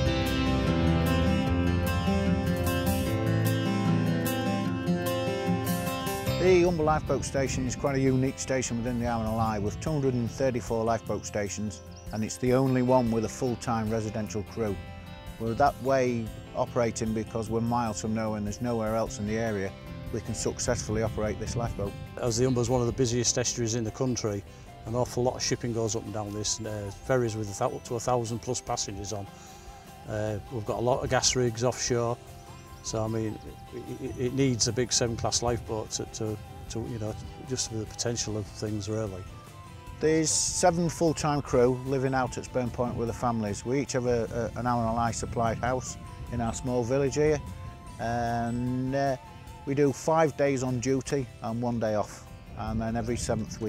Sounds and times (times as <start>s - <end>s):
Music: 0.0s - 53.6s
Speech: 6.4s - 14.8s, 15.4s - 29.3s, 30.1s - 32.2s, 32.8s - 39.2s, 40.0s - 47.4s, 48.0s - 53.6s.